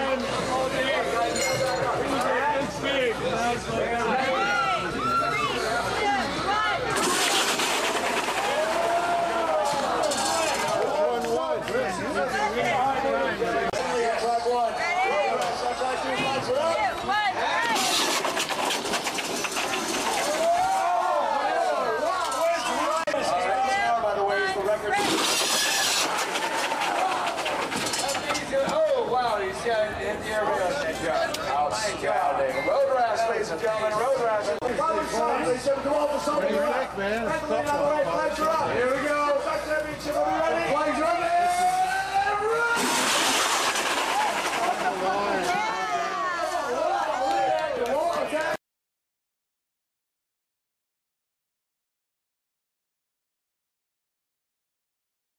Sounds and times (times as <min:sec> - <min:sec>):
Speech: 0:28.0 - 0:42.8.